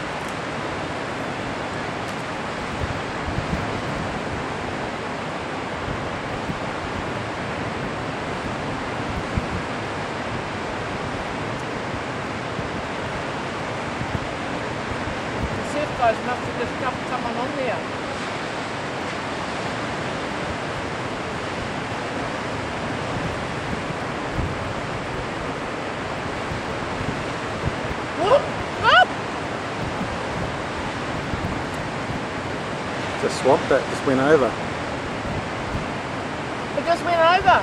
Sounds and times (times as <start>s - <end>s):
Waves, surf: 0.0s - 37.6s
Wind noise (microphone): 0.0s - 37.6s.